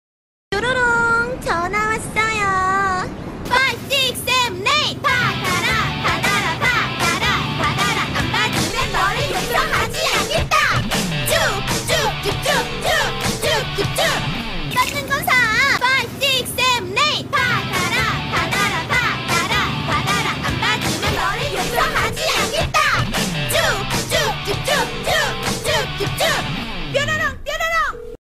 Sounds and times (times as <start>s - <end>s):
Music: 3.5s - 27.3s.